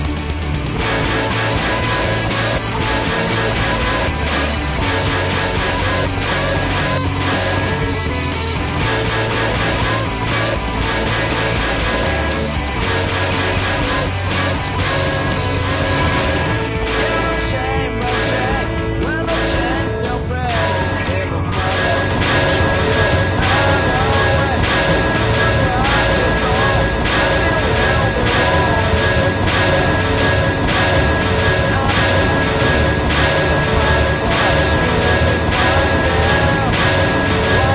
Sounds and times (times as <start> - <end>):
Music: 0.0 - 37.7.